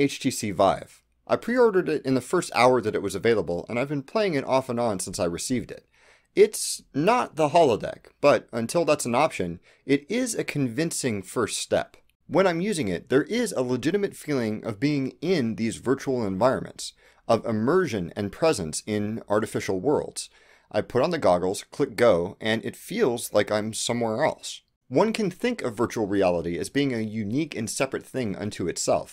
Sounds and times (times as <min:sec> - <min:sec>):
Speech: 0:00.0 - 0:29.1.